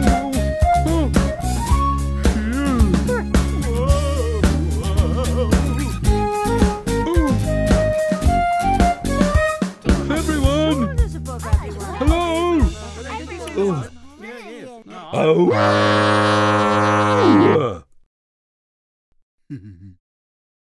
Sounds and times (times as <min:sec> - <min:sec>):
Music: 0:00.0 - 0:15.2
Speech: 0:10.1 - 0:15.6.